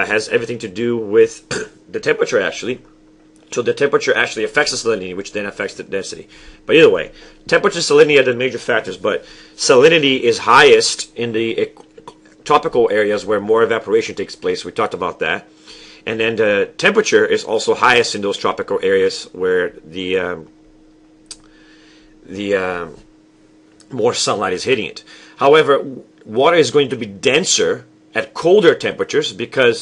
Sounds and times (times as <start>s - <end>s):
Speech: 0.0s - 2.9s, 3.5s - 20.5s, 22.3s - 23.1s, 23.8s - 29.8s.